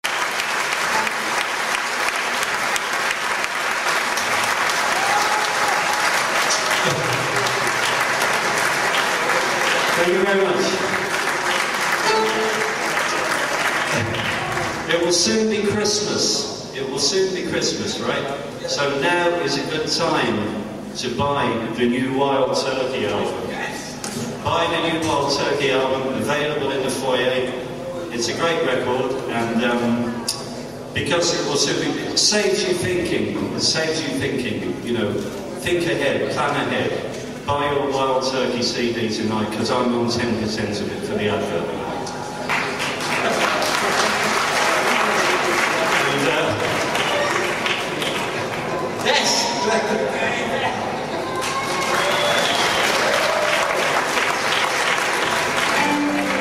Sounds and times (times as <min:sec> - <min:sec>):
Speech: 0:09.9 - 0:11.0, 0:14.9 - 0:42.2, 0:45.9 - 0:47.4, 0:49.0 - 0:50.9.